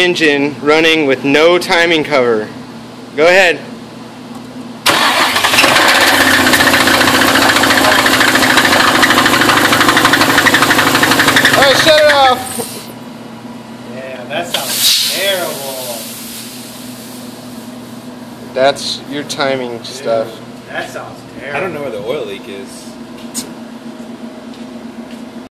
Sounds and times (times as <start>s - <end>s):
Speech: 0.0s - 2.6s, 11.6s - 12.6s, 13.9s - 16.1s, 18.5s - 23.0s
Heavy engine (low frequency): 4.7s - 13.6s, 14.5s - 19.2s.